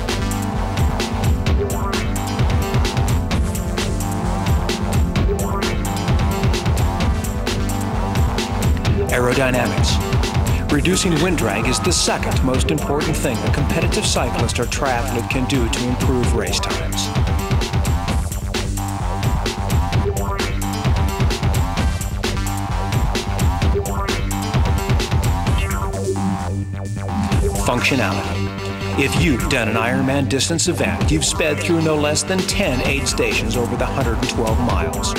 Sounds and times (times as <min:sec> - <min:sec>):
Music: 0:00.0 - 0:35.1
Speech: 0:09.1 - 0:10.0, 0:10.7 - 0:17.1, 0:27.6 - 0:28.4, 0:29.0 - 0:35.1.